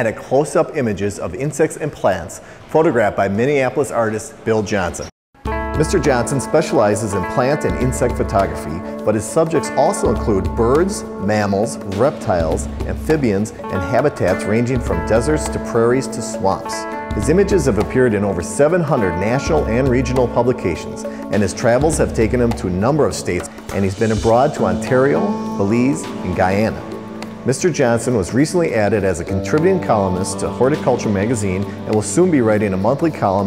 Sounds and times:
Speech: 0:00.0 - 0:05.2, 0:05.8 - 0:33.4
Music: 0:05.4 - 0:33.4.

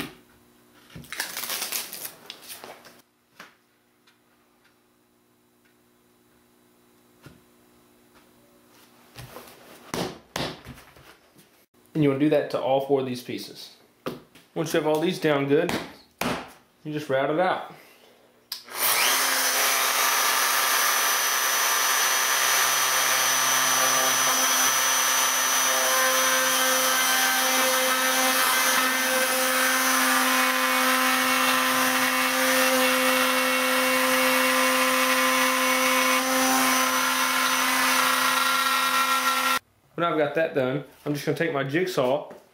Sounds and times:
Power tool: 0:18.6 - 0:39.6.

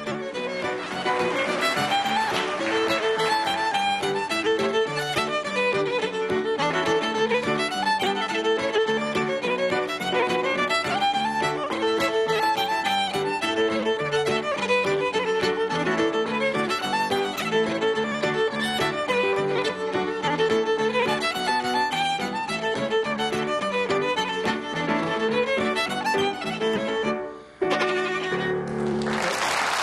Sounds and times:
Violin, fiddle: 0:00.0 - 0:29.0.

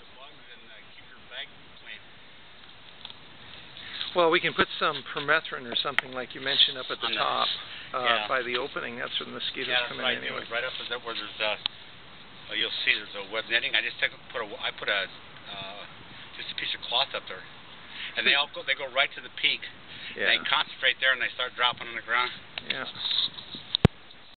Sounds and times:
Speech: 0:00.1 - 0:02.0, 0:04.1 - 0:11.6, 0:12.5 - 0:17.5, 0:18.2 - 0:23.0.

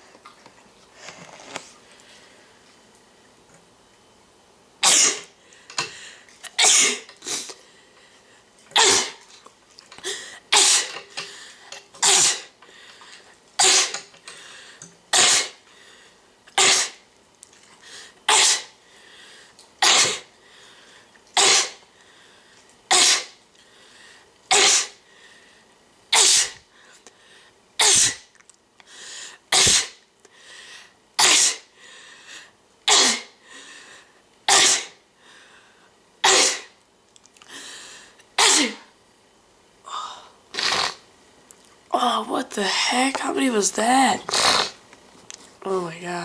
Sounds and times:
Sneeze: 0:04.8 - 0:05.4, 0:06.4 - 0:07.5, 0:08.8 - 0:09.3, 0:10.5 - 0:11.0, 0:12.0 - 0:12.6, 0:13.6 - 0:14.1, 0:15.1 - 0:15.6, 0:16.6 - 0:17.0, 0:18.3 - 0:18.8, 0:19.8 - 0:20.3, 0:21.4 - 0:21.8, 0:22.9 - 0:23.4, 0:24.5 - 0:25.0, 0:26.1 - 0:26.7, 0:27.8 - 0:28.3, 0:29.5 - 0:30.0, 0:31.2 - 0:31.7, 0:32.9 - 0:33.4, 0:34.5 - 0:35.0, 0:36.2 - 0:36.8, 0:38.4 - 0:38.9, 0:40.5 - 0:41.0, 0:44.3 - 0:44.8.

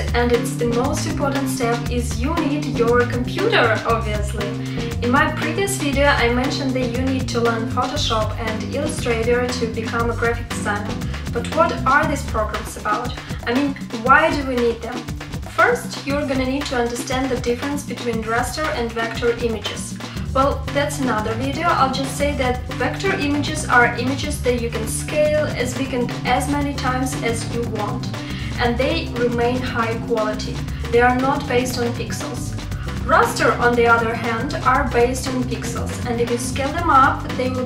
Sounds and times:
Music: 0:00.0 - 0:37.6
Speech: 0:00.0 - 0:37.6.

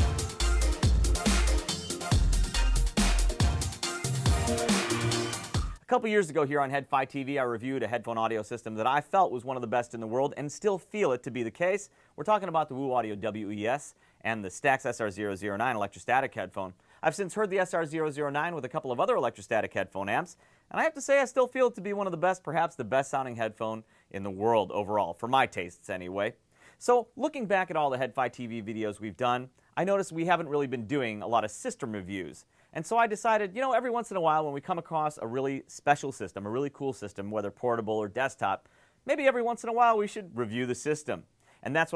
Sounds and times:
Speech: 0:05.8 - 0:41.9.

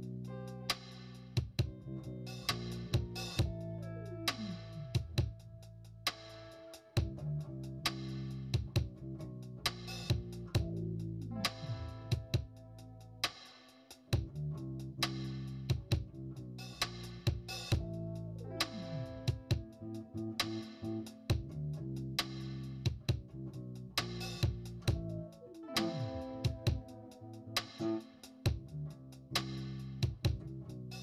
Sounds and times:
Music: 0:00.0 - 0:31.0.

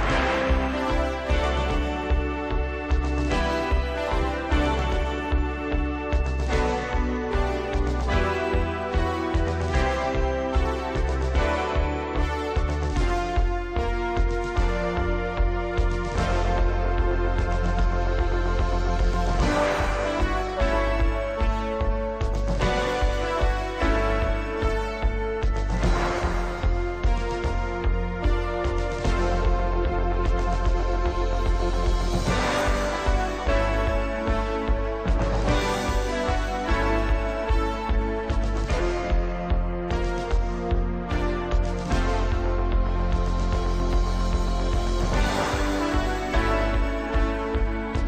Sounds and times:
Music: 0:00.0 - 0:48.0.

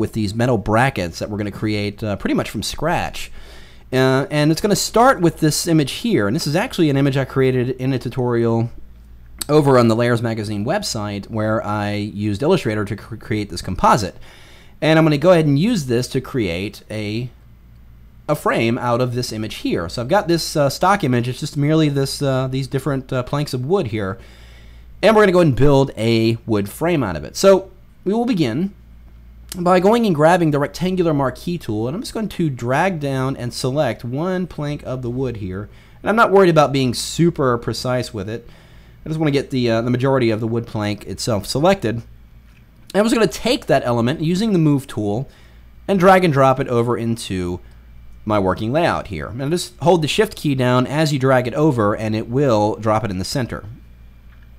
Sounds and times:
Speech: 0:00.0 - 0:08.8, 0:09.4 - 0:14.2, 0:14.8 - 0:17.4, 0:18.3 - 0:24.2, 0:25.0 - 0:28.8, 0:29.5 - 0:42.1, 0:42.9 - 0:45.3, 0:45.9 - 0:47.6, 0:48.2 - 0:53.8.

